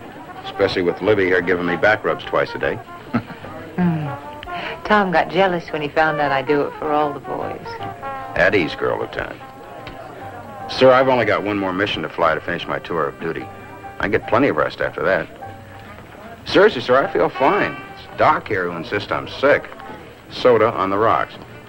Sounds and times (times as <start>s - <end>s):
Music: 0.0s - 21.6s
Speech: 0.4s - 2.8s, 4.8s - 15.3s, 16.2s - 21.5s.